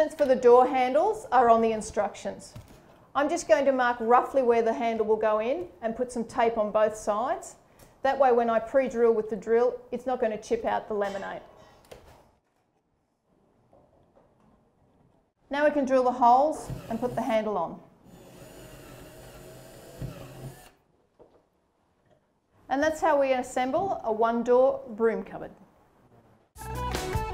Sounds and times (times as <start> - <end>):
Female speech, woman speaking: 0.0 - 2.6, 3.2 - 11.4, 15.5 - 17.8, 22.7 - 25.6.